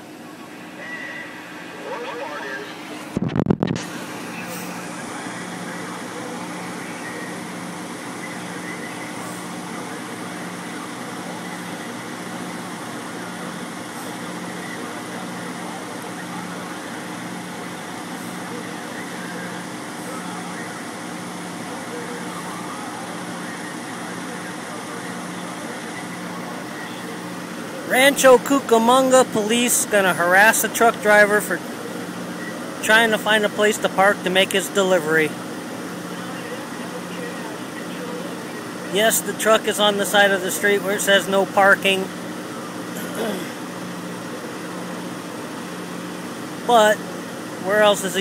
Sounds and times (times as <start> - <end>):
Truck: 0.0 - 48.2
Speech: 27.8 - 31.6, 32.8 - 35.4, 36.1 - 42.1, 46.7 - 47.0, 47.6 - 48.2.